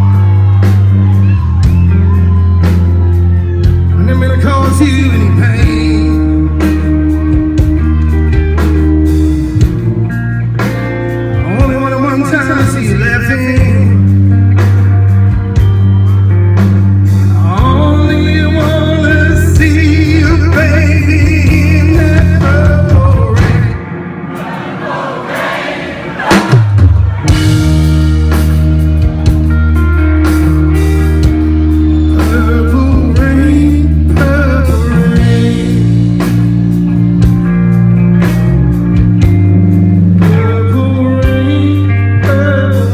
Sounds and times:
Music: 0.0s - 42.9s.

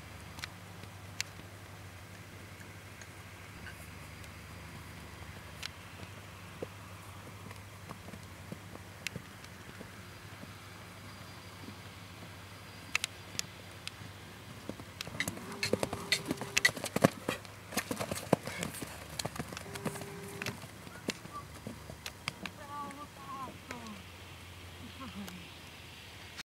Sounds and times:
Clip-clop: 0.1s - 24.0s.

